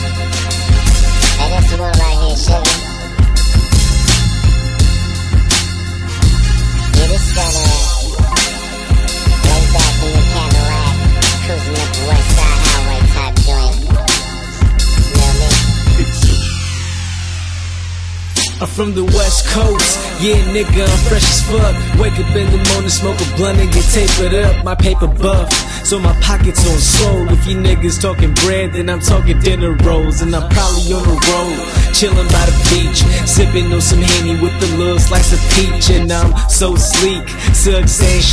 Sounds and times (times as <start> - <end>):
Pop music: 0.0 - 38.3.